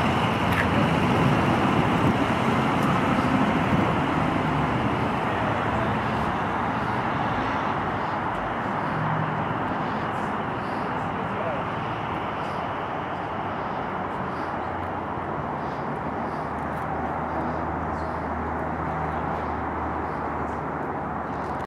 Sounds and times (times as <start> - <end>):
Outside, urban or manmade: 0.0 - 21.6.